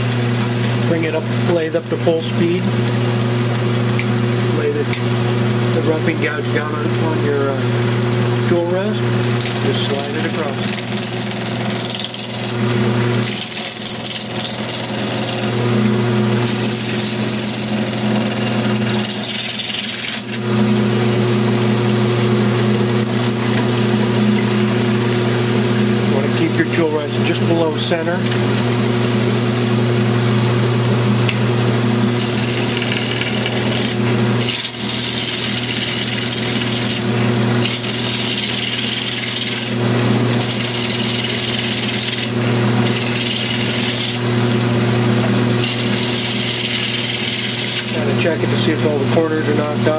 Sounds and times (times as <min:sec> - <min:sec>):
Speech: 0:00.9 - 0:02.7, 0:04.5 - 0:05.0, 0:05.7 - 0:07.7, 0:08.4 - 0:10.7, 0:26.1 - 0:28.3, 0:48.0 - 0:49.9.